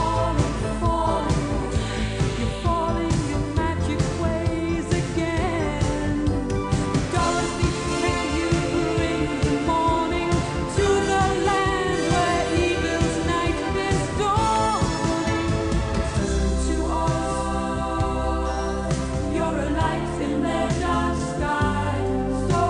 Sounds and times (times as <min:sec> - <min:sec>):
Soundtrack music: 0:00.0 - 0:22.6.